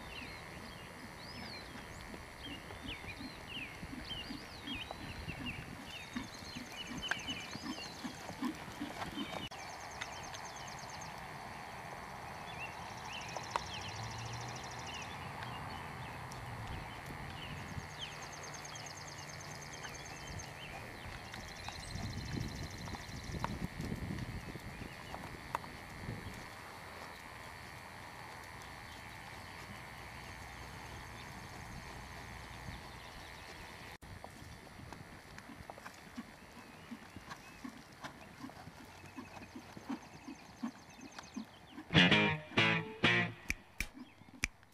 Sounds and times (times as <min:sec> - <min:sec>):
Clip-clop: 0:00.0 - 0:41.9.